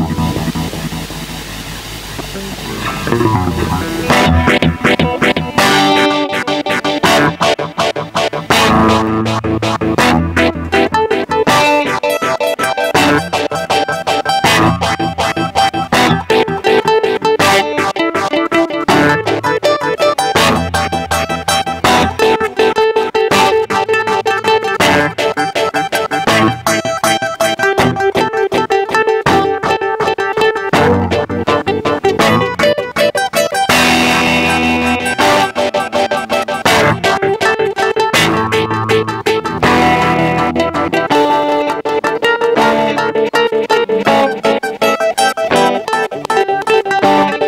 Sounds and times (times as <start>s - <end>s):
Effects unit: 0.0s - 47.4s
Guitar: 0.0s - 47.4s
Synthesizer: 0.0s - 47.4s.